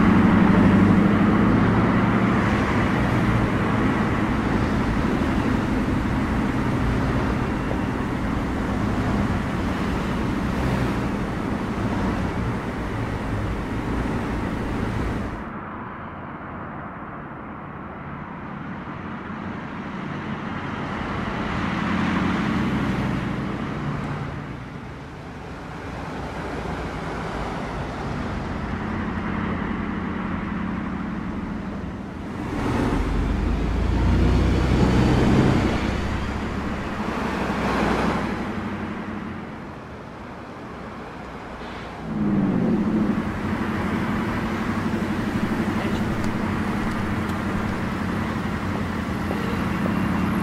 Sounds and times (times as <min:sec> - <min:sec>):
Bus: 0:00.0 - 0:50.4.